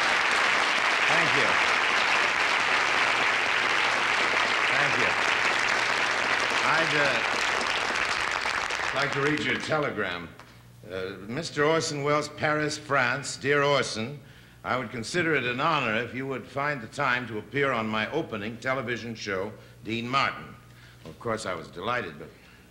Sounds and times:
Speech: 0:01.1 - 0:01.6, 0:04.7 - 0:05.2, 0:06.6 - 0:07.2, 0:08.9 - 0:22.4.

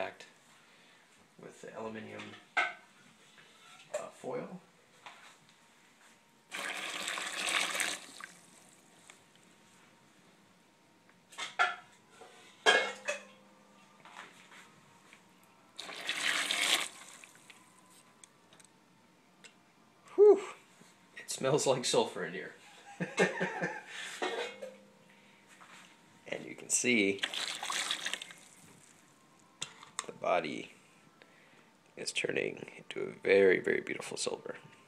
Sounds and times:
Speech: 0:00.0 - 0:00.4, 0:01.4 - 0:02.4, 0:04.0 - 0:04.7, 0:21.2 - 0:22.6, 0:26.3 - 0:27.2, 0:30.0 - 0:30.8, 0:32.0 - 0:34.6.

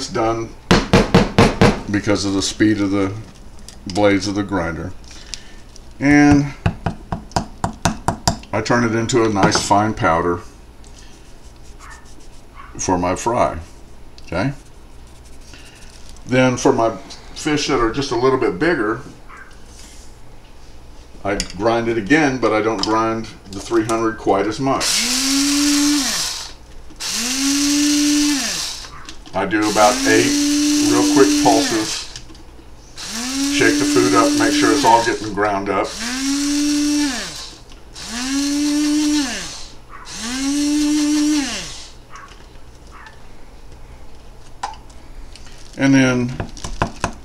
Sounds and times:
Blender: 0:24.8 - 0:28.9, 0:29.6 - 0:32.2, 0:33.0 - 0:35.2, 0:35.9 - 0:42.0.

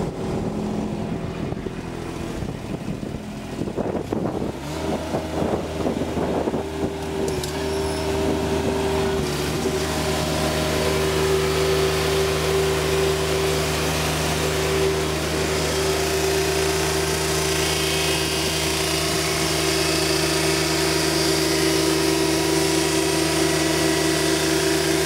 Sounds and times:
Medium engine (mid frequency): 0:00.0 - 0:25.0
Vehicle: 0:00.0 - 0:25.0.

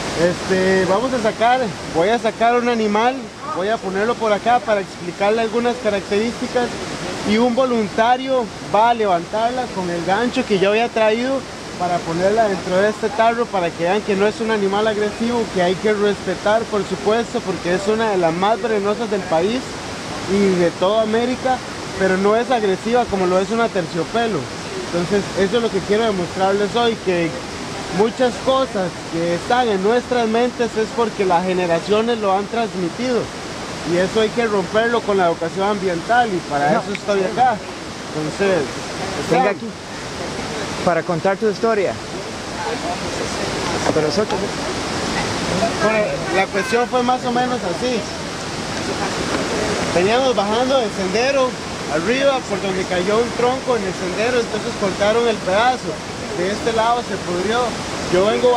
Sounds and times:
Outside, rural or natural: 0:00.0 - 0:58.5.

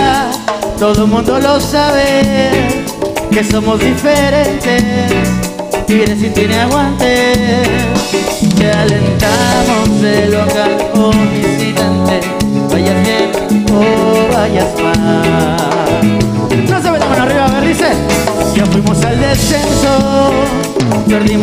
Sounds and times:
Music: 0:00.0 - 0:21.4.

